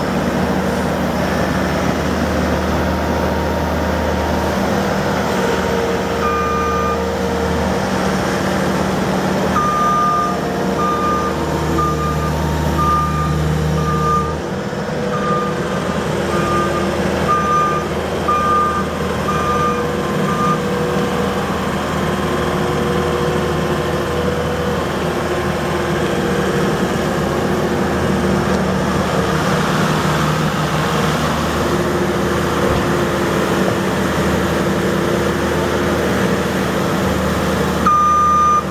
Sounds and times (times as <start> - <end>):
Outside, rural or natural: 0.0 - 38.7
Vehicle: 0.0 - 38.7.